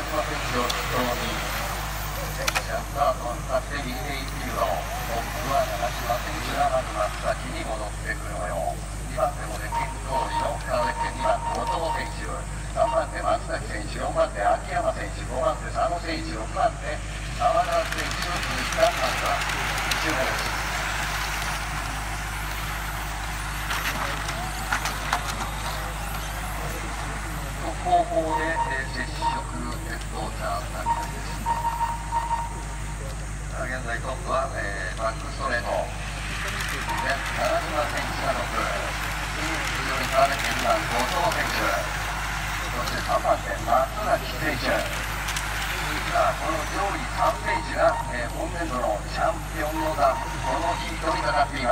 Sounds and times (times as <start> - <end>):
Speech: 0.0 - 20.7, 23.8 - 31.7, 32.3 - 42.0, 42.6 - 51.7.